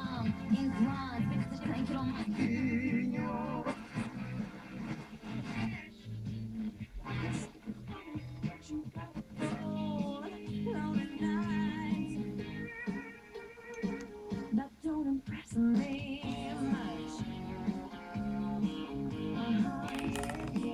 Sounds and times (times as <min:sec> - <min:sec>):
Music: 0:00.0 - 0:20.7.